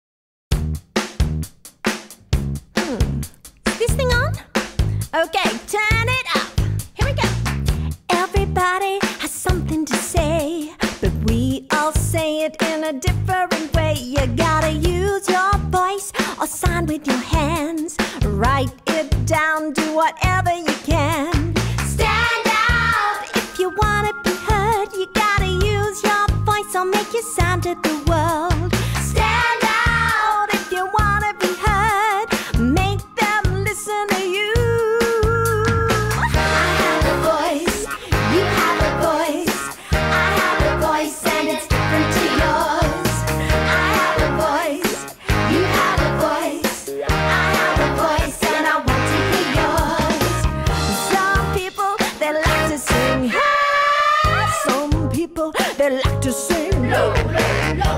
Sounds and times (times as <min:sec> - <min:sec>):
Dance music: 0:21.4 - 0:53.6, 0:56.5 - 0:57.9.